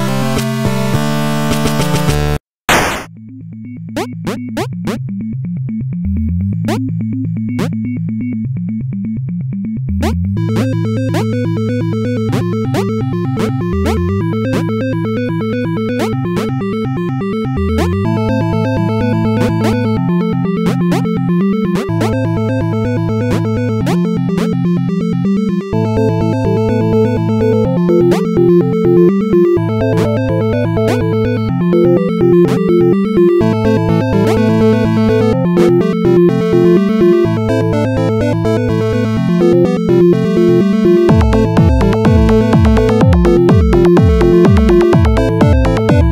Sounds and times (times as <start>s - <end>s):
Music: 0.0s - 2.4s, 3.1s - 46.1s.